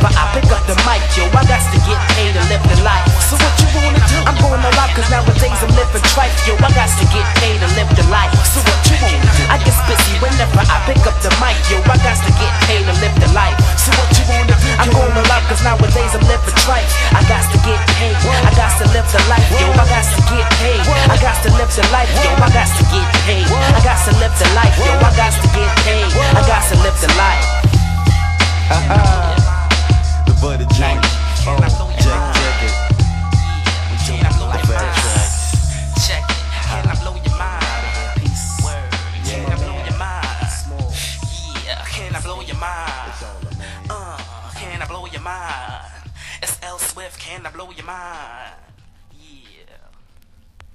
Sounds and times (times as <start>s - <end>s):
Electronic music: 0.0s - 46.1s
Rapping: 0.0s - 50.0s.